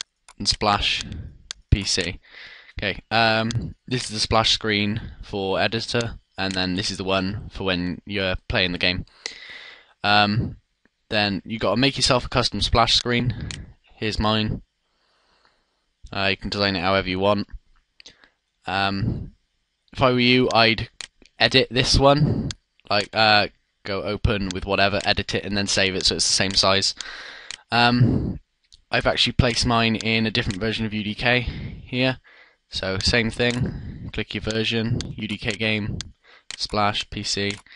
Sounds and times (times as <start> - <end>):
Speech: 0.3 - 9.4, 10.0 - 14.6, 16.1 - 17.6, 18.7 - 19.3, 20.0 - 27.0, 27.7 - 37.7.